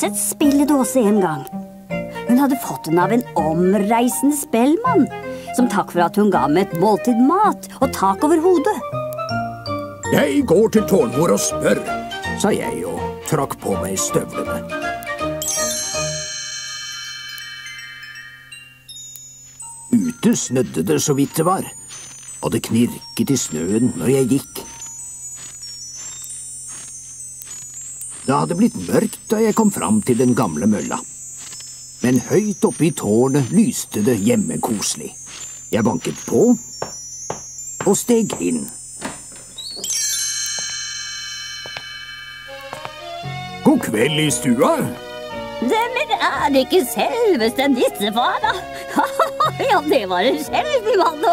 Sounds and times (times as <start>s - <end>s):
Speech: 0.0s - 1.4s, 2.3s - 8.8s, 10.1s - 14.6s, 19.9s - 21.7s, 22.4s - 24.7s, 28.3s - 31.0s, 32.0s - 35.2s, 35.8s - 36.6s, 37.8s - 38.8s, 43.6s - 45.0s, 45.6s - 48.6s, 49.5s - 51.3s.